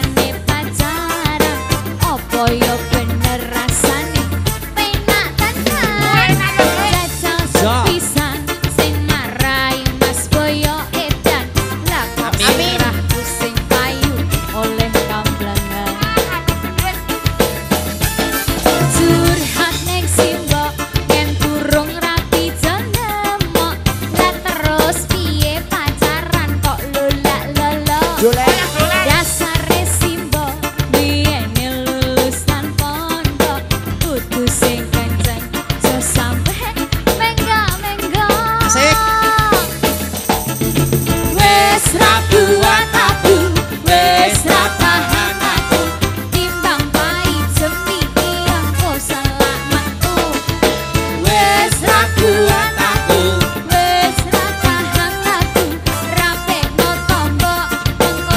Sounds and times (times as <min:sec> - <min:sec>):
Music: 0:00.0 - 0:58.3.